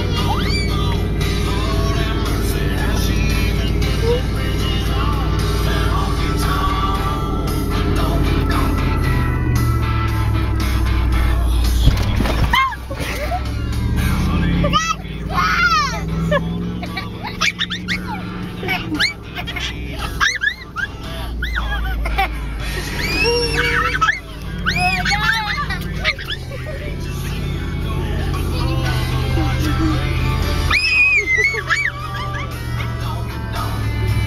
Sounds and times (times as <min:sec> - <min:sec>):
Car: 0:00.0 - 0:34.2
Music: 0:00.0 - 0:34.2
Outside, rural or natural: 0:00.0 - 0:34.2.